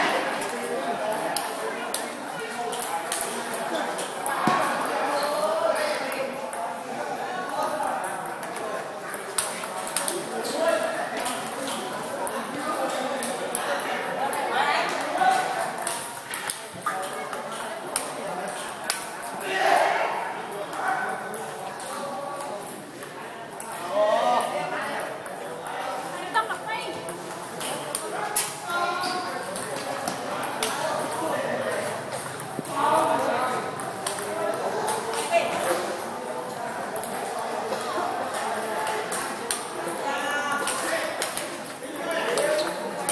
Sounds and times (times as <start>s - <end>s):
Speech: 0.0s - 43.1s.